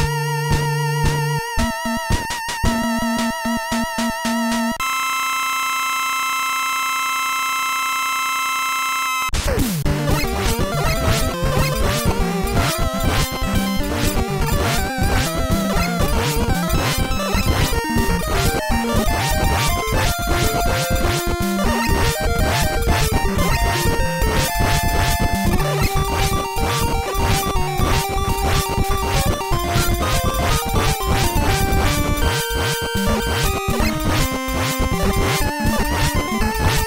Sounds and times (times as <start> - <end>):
Music: 0.0 - 5.0, 9.4 - 36.8.